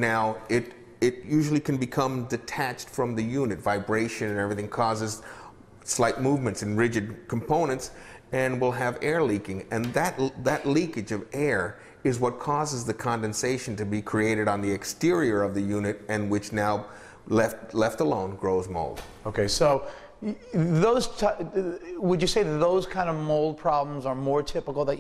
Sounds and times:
Speech: 0.0s - 5.2s, 5.8s - 25.0s.

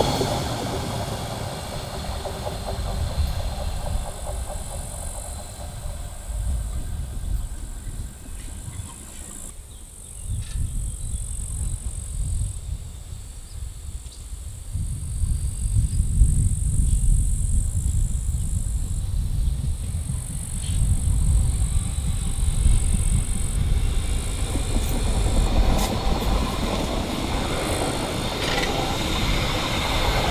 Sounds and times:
Railroad car, train wagon: 0.0s - 30.3s
Train: 0.0s - 30.3s.

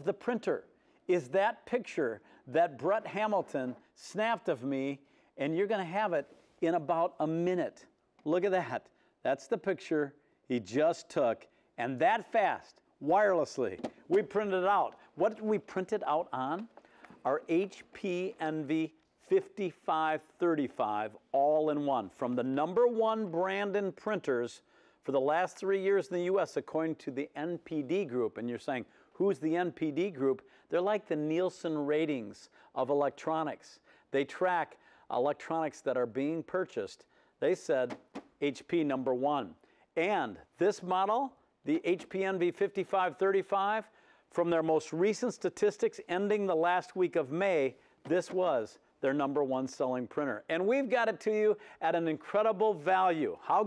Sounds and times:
Speech: 0.0s - 53.6s.

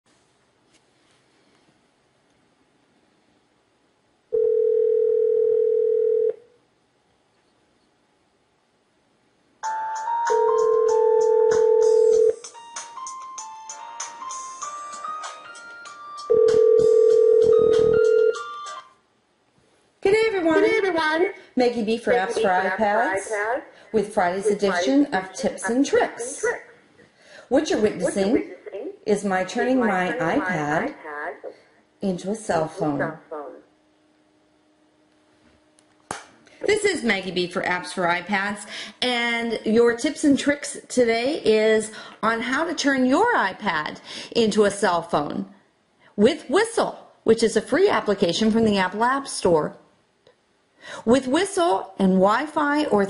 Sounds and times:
Dial tone: 4.3s - 6.4s, 10.3s - 12.4s, 16.3s - 18.8s
Music: 9.6s - 18.9s.

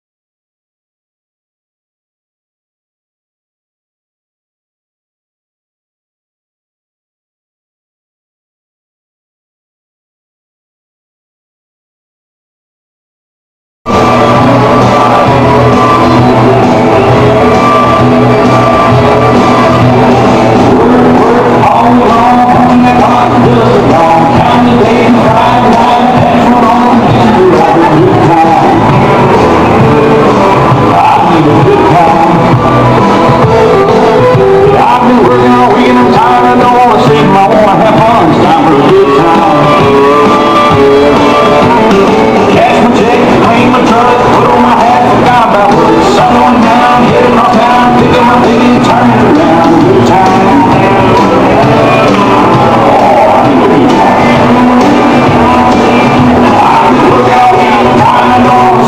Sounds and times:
Music: 13.9s - 58.8s.

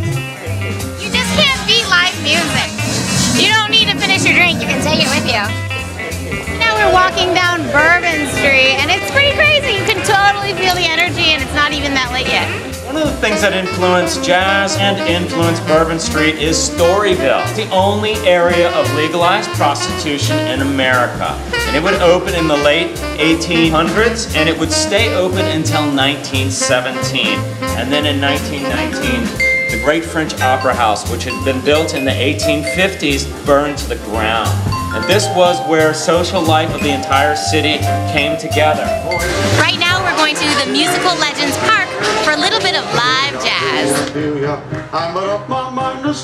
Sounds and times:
Speech: 6.6s - 39.0s.

